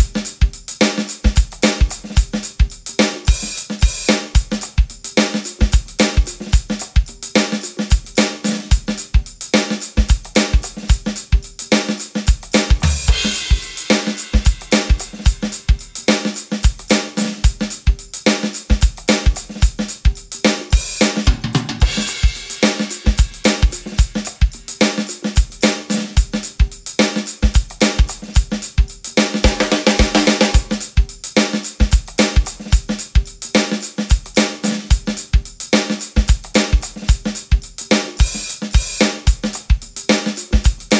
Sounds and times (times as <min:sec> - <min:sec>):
Drum: 0:00.0 - 0:40.9
Drum kit: 0:00.0 - 0:40.9.